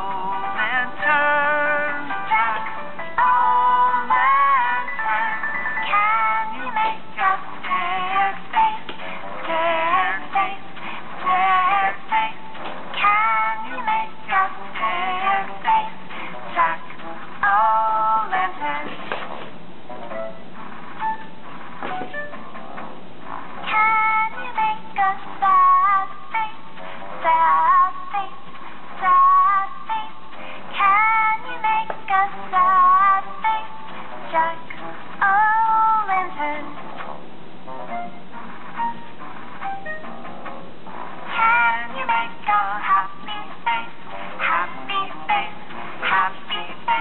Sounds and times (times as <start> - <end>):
Inside, small room: 0.0 - 47.0
Music: 0.0 - 47.0.